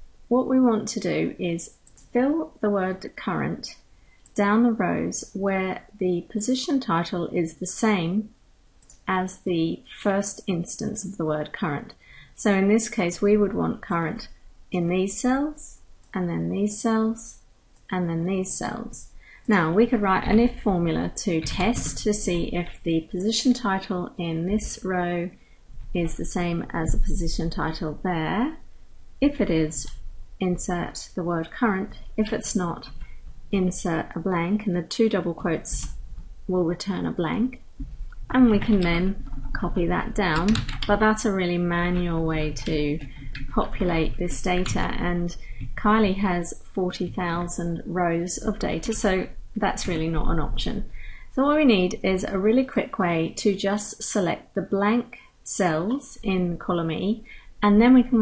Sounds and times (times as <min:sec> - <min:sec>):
Speech: 0:00.3 - 0:03.8, 0:04.4 - 0:25.4, 0:26.0 - 0:28.6, 0:29.2 - 0:33.0, 0:33.6 - 0:35.9, 0:36.5 - 0:37.6, 0:38.3 - 0:58.2.